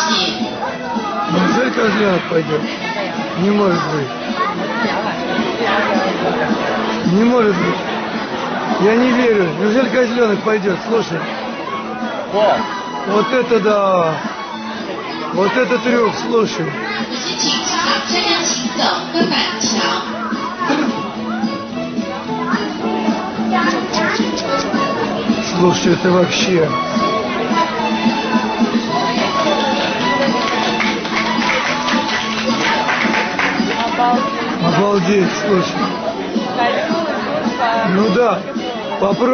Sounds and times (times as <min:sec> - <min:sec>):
Music: 0:00.0 - 0:39.3.